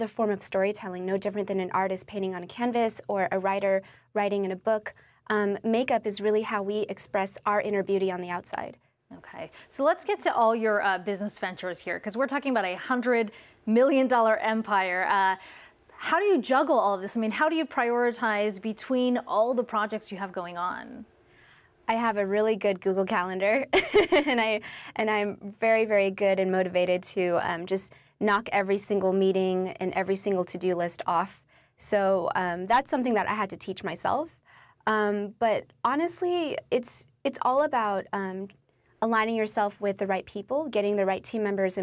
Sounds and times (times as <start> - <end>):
Female speech, woman speaking: 0.0 - 15.4, 16.0 - 21.1, 21.9 - 34.3, 34.9 - 41.8.